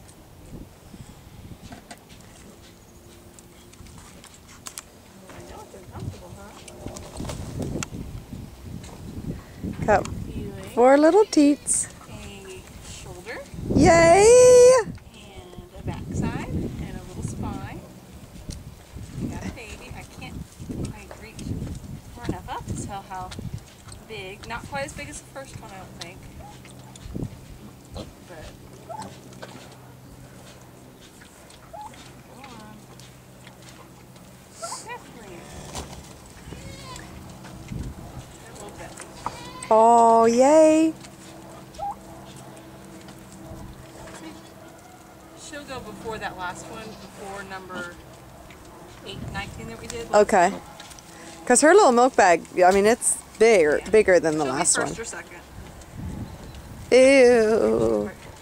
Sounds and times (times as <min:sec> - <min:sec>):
Goat: 0:18.4 - 0:40.0, 0:40.9 - 0:45.4.